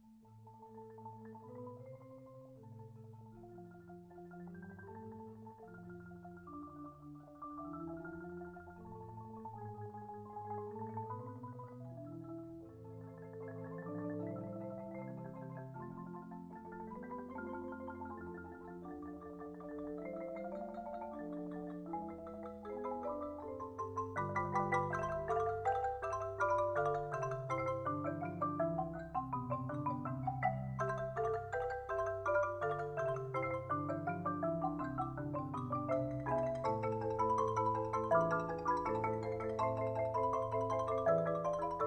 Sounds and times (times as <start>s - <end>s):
Glockenspiel: 0.0s - 41.8s
Marimba, xylophone: 0.0s - 41.8s.